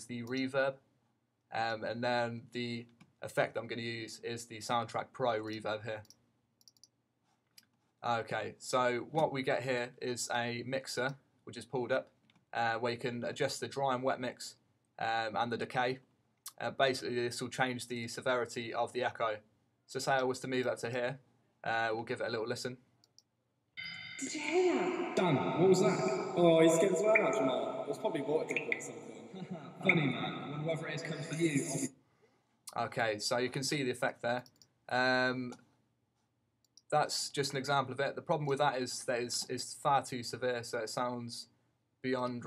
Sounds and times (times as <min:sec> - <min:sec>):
Speech: 0:00.0 - 0:00.8, 0:01.5 - 0:06.1, 0:08.0 - 0:22.8, 0:23.8 - 0:31.9, 0:32.7 - 0:35.6, 0:36.9 - 0:42.4.